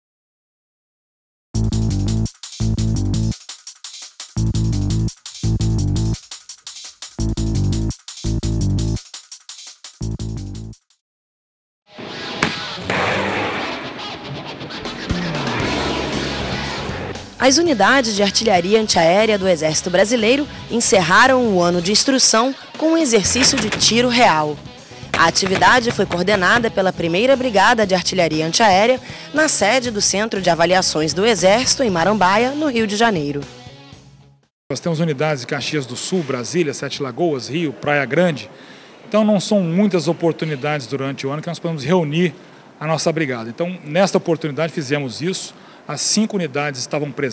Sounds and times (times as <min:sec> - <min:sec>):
Music: 0:01.6 - 0:11.0, 0:11.9 - 0:34.5
Speech: 0:17.4 - 0:24.6, 0:25.2 - 0:33.5, 0:34.7 - 0:47.3.